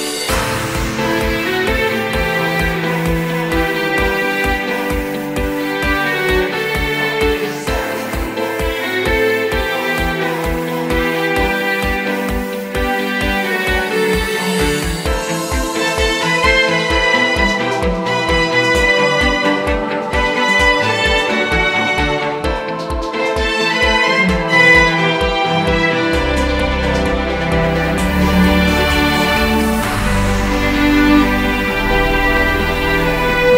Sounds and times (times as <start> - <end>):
Music: 0.0 - 33.5.